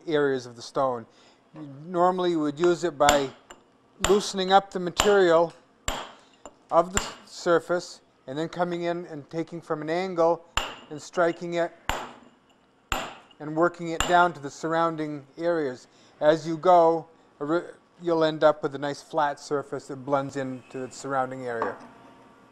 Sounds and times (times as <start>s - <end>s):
Hammer: 3.1s - 3.4s, 4.0s - 4.4s, 5.9s - 6.2s, 10.6s - 10.9s, 11.9s - 12.2s, 13.0s - 13.3s.